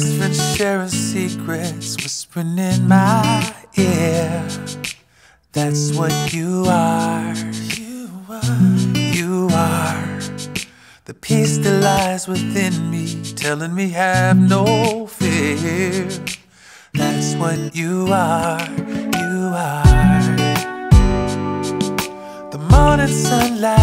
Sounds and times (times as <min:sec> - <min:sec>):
Tender music: 0:18.9 - 0:23.8.